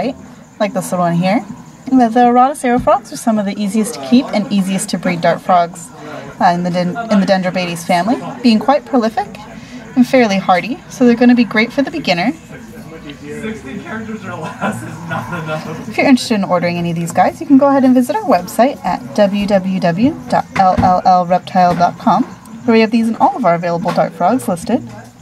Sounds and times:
Speech: 0:00.0 - 0:25.2.

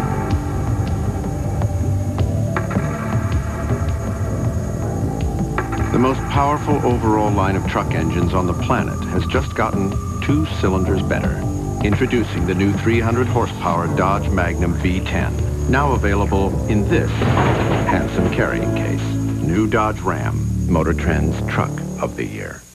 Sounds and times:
Music: 0:00.0 - 0:22.7
Speech: 0:05.9 - 0:22.7.

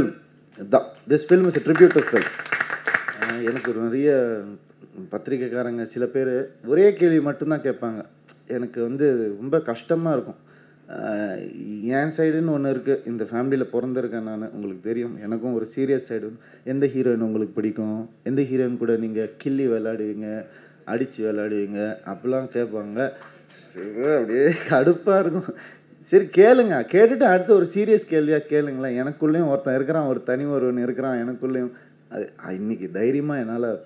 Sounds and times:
Speech: 0:03.2 - 0:33.8.

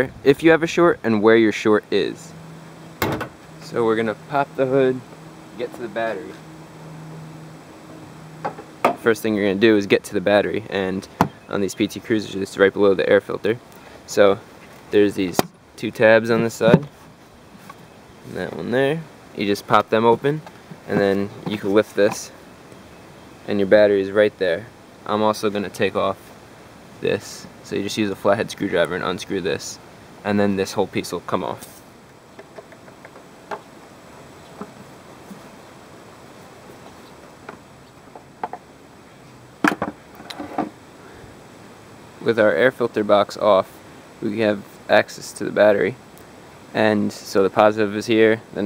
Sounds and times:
Speech: 0:00.0 - 0:02.4, 0:03.6 - 0:05.0, 0:05.6 - 0:06.4, 0:09.0 - 0:16.9, 0:18.3 - 0:22.4, 0:23.5 - 0:26.3, 0:27.0 - 0:31.8, 0:42.2 - 0:46.0, 0:46.7 - 0:48.6
Outside, urban or manmade: 0:00.0 - 0:48.6.

